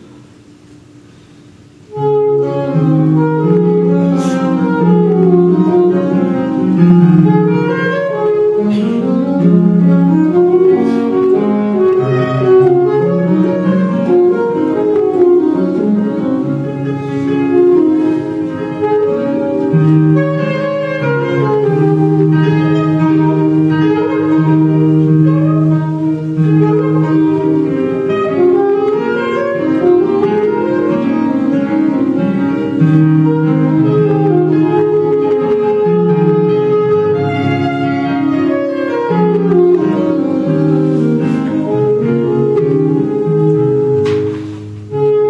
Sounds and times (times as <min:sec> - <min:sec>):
Saxophone: 0:01.1 - 0:45.3.